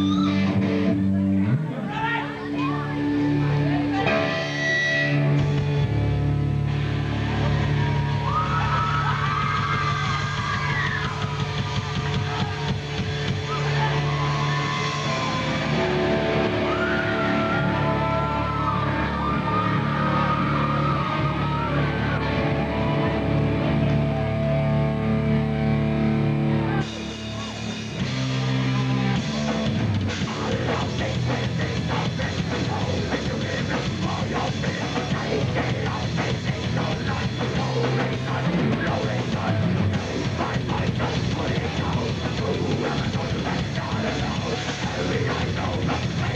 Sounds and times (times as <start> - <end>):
Blues: 0.0 - 46.3.